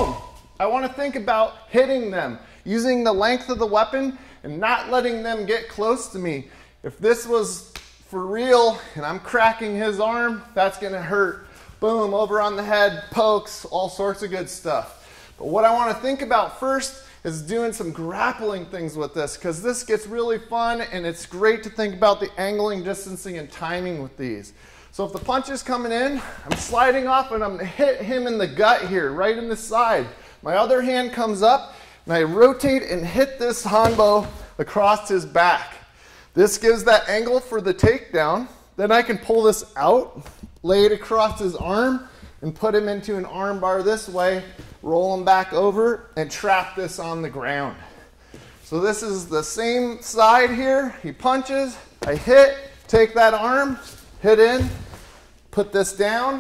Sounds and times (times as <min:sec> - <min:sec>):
Speech: 0:00.0 - 0:47.9, 0:48.7 - 0:54.9, 0:55.5 - 0:56.4.